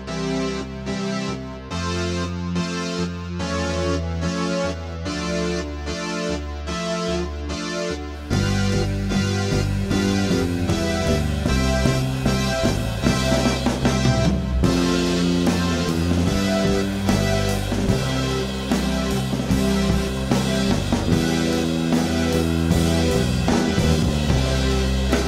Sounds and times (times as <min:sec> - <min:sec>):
Soundtrack music: 0:00.0 - 0:25.2.